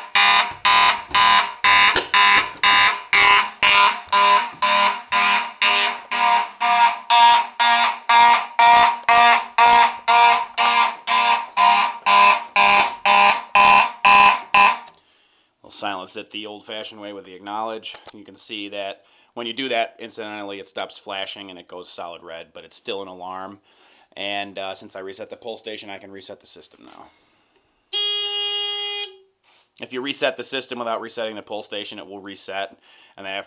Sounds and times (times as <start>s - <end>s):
Speech: 15.6s - 23.6s, 24.2s - 27.1s, 29.8s - 33.4s.